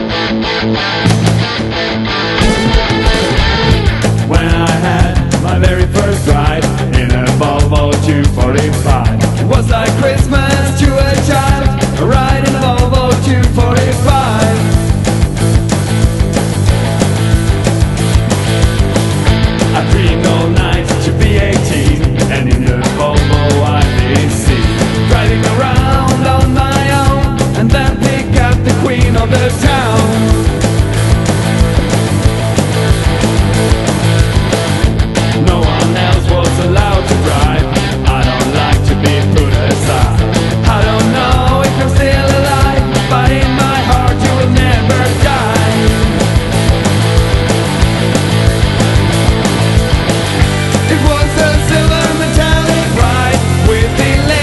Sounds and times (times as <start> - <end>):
Exciting music: 0.0 - 54.4
Soundtrack music: 0.0 - 54.4
Pop music: 1.0 - 54.4.